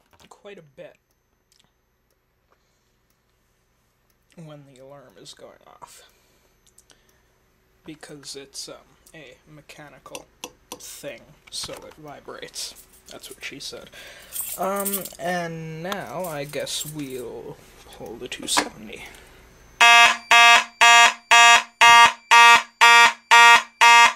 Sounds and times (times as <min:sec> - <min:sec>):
Speech: 0:00.2 - 0:01.0, 0:04.3 - 0:06.2, 0:07.8 - 0:14.0, 0:14.6 - 0:19.2
Fire alarm: 0:19.8 - 0:24.1.